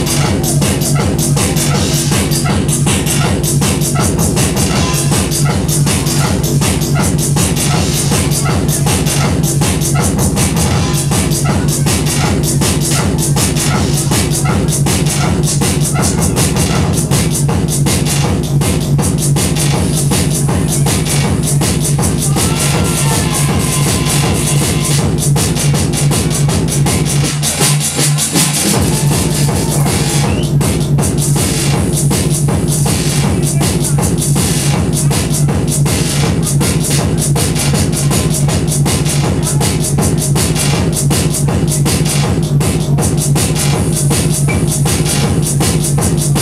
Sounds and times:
Music: 0.0 - 46.4.

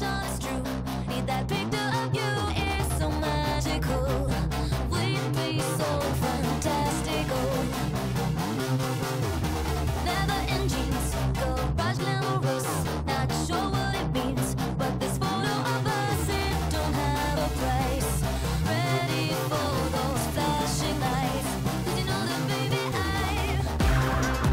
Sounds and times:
Electronic music: 0.0 - 24.5.

